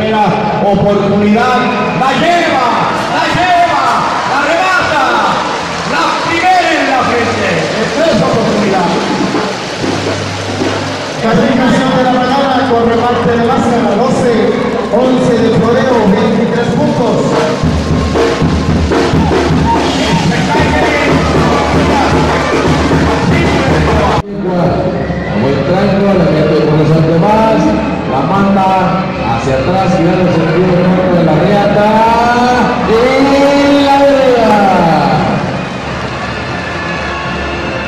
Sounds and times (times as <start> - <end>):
Speech: 0.0 - 9.1, 11.2 - 17.6, 19.7 - 22.2, 23.2 - 35.5
Music: 0.0 - 37.8.